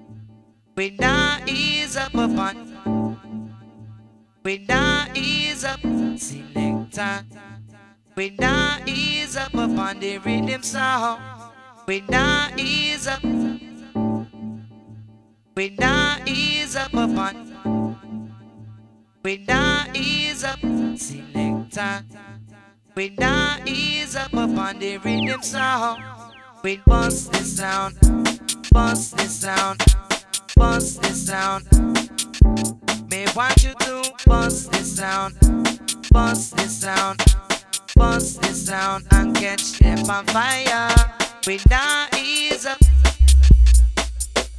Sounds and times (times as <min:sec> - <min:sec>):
Music: 0:00.0 - 0:44.5.